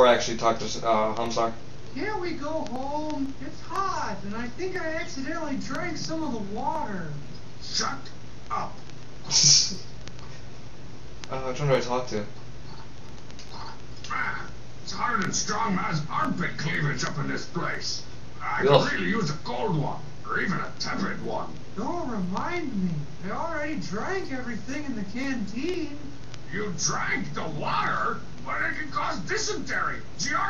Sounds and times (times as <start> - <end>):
Speech: 0.0 - 9.9, 11.3 - 12.3, 13.6 - 30.5.